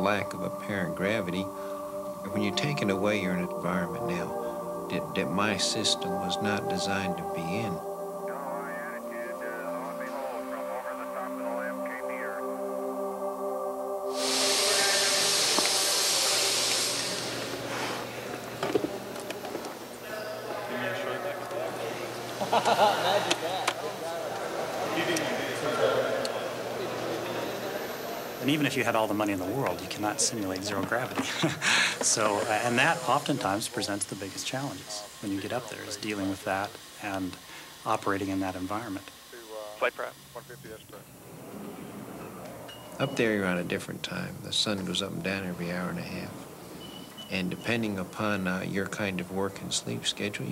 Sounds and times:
Music: 0.0 - 39.0.

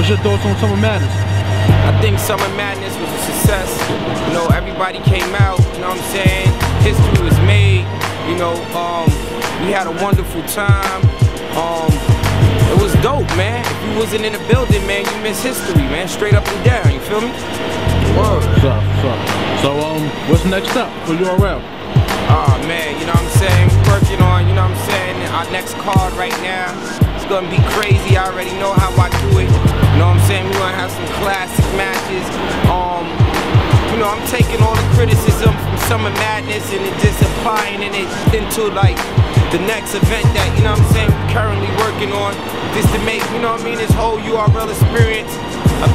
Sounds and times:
Speech: 0.0 - 1.1, 1.8 - 12.0, 12.6 - 17.4, 18.0 - 21.6, 22.3 - 33.1, 33.9 - 39.0, 39.6 - 45.9
Music: 0.0 - 45.9.

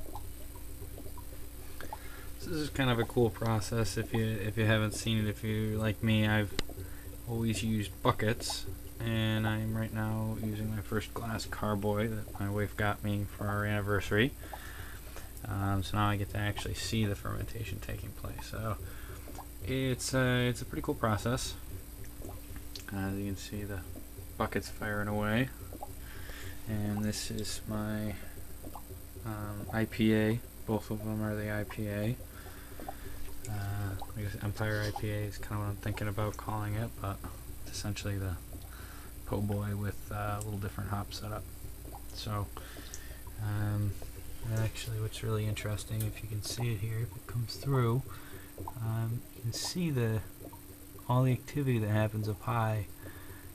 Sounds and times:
Speech: 2.4 - 6.6, 7.3 - 14.4, 15.4 - 18.8, 19.6 - 21.6, 22.9 - 25.6, 26.7 - 28.3, 29.2 - 32.2, 33.5 - 38.4, 39.3 - 41.4, 42.2 - 42.6, 43.4 - 48.1, 48.8 - 50.3, 51.1 - 52.9.

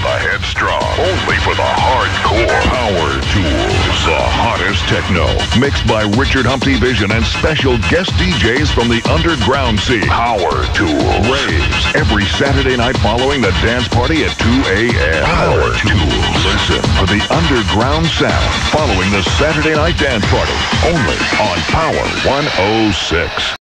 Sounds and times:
Speech: 0.0 - 23.6
Techno: 0.2 - 23.6.

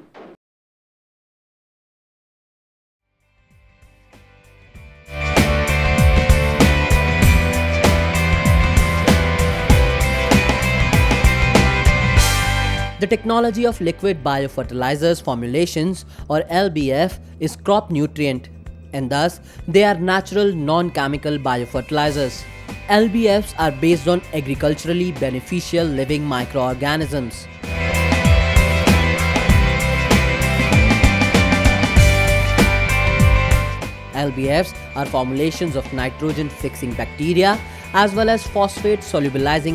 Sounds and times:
Music: 3.0 - 39.7
Speech: 13.0 - 27.4, 34.2 - 39.7.

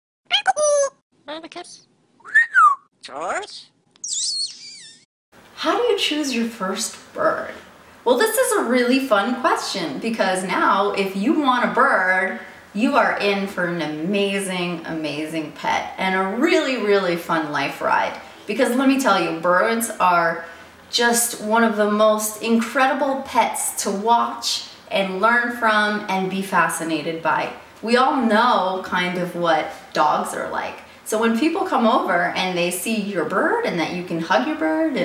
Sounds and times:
Speech: 0.3 - 1.9, 3.0 - 3.7, 5.6 - 35.0
Inside, small room: 0.3 - 35.0
Bird: 2.2 - 5.0.

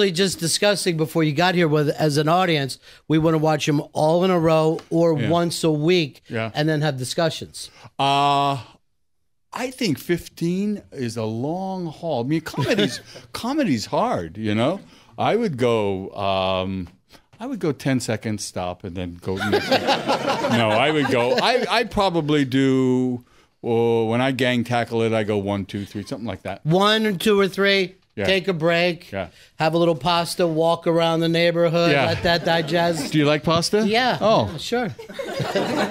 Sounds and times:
Speech: 0.0 - 8.7, 9.6 - 19.6, 20.5 - 35.0.

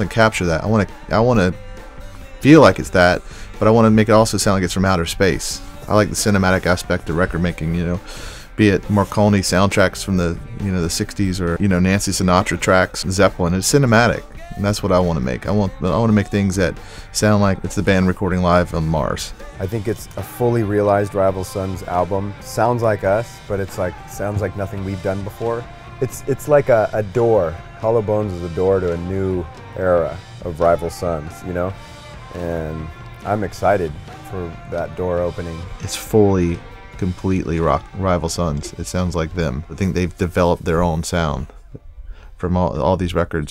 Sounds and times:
Speech: 0.0 - 1.6, 2.4 - 41.6, 42.4 - 43.5
Music: 0.0 - 43.5.

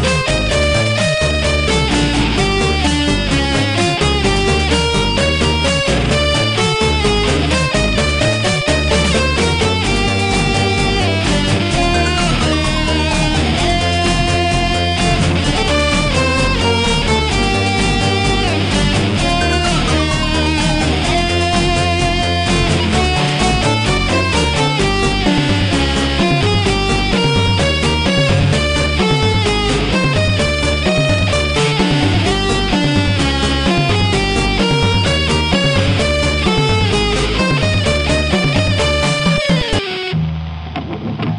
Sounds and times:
Guitar: 0.0 - 41.3.

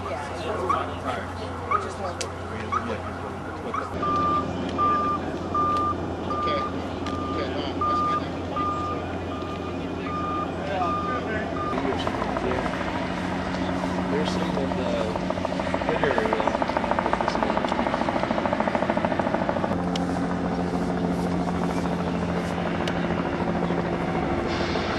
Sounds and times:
Helicopter: 0.0 - 24.9
Truck: 3.3 - 15.9, 17.2 - 24.9.

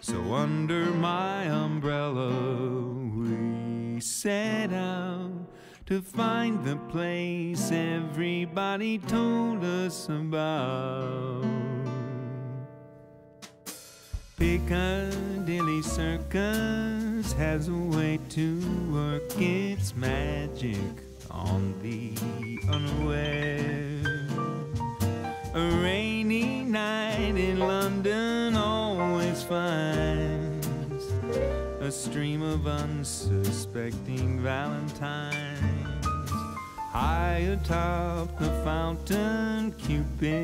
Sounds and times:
Sad music: 14.5 - 32.9, 34.5 - 40.4.

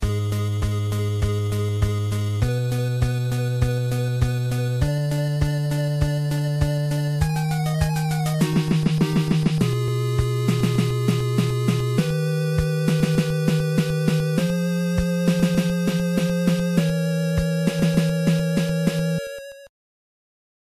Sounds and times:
Music: 0.0 - 19.7.

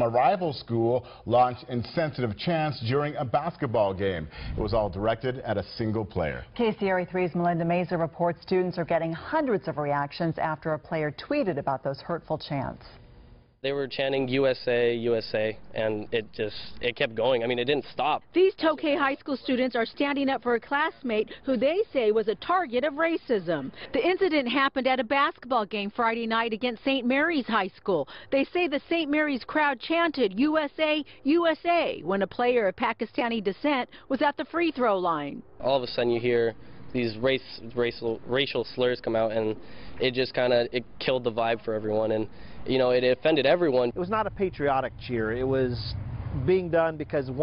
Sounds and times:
Speech: 13.6 - 23.1.

